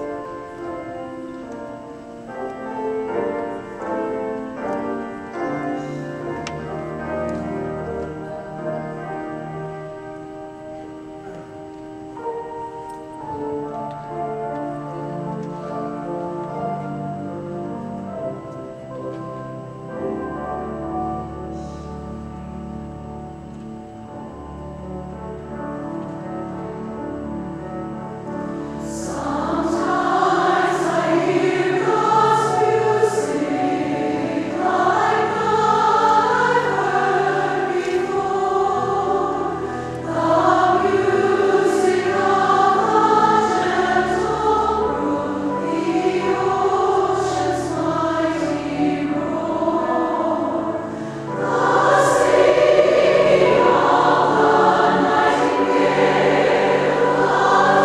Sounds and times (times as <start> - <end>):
Music: 0.0 - 57.8.